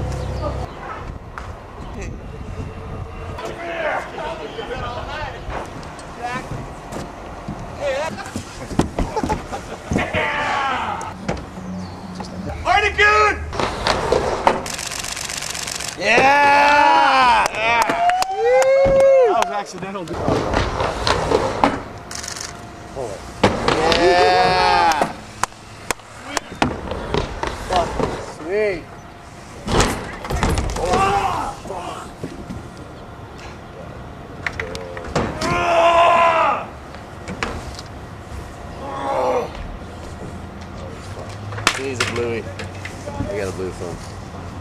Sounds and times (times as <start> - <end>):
Outside, urban or manmade: 0.0 - 44.6.